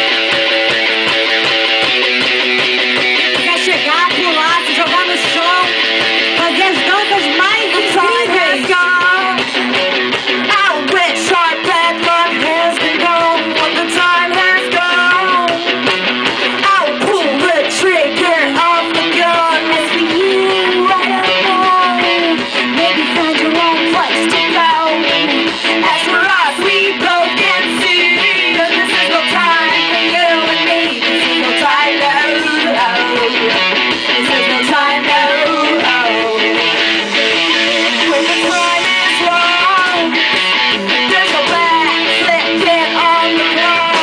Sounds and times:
Music: 0.0s - 44.0s.

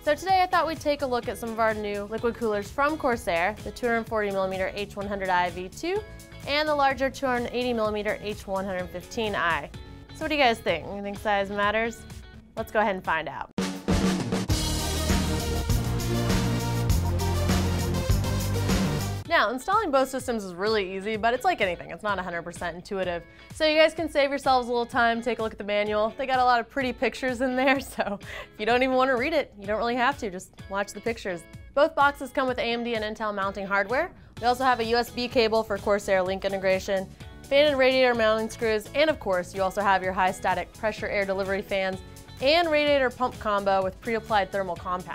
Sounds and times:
Speech: 0.0s - 12.0s, 12.6s - 13.5s, 19.3s - 45.1s
Music: 0.0s - 45.1s.

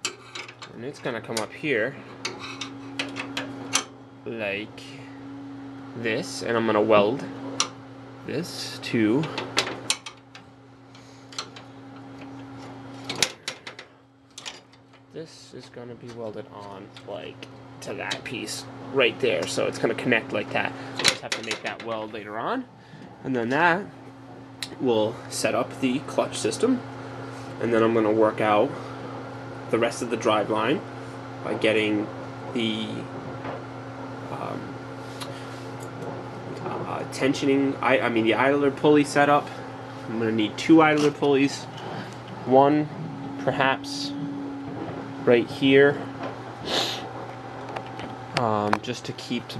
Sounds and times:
Speech: 0.8s - 2.0s, 4.2s - 5.1s, 6.0s - 7.3s, 8.2s - 9.4s, 15.2s - 23.9s, 24.6s - 26.8s, 27.6s - 28.8s, 29.7s - 30.8s, 31.4s - 33.1s, 34.3s - 34.8s, 36.6s - 39.5s, 40.1s - 41.7s, 42.4s - 44.2s, 45.2s - 46.0s, 48.4s - 49.5s.

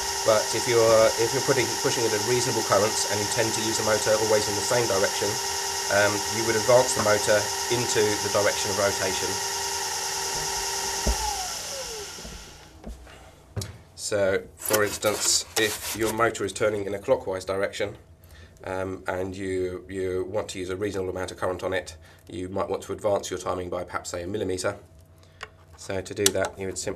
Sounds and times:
Inside, small room: 0.0s - 26.9s
Speech: 0.3s - 9.4s, 14.0s - 18.0s, 18.6s - 24.8s, 25.8s - 26.9s.

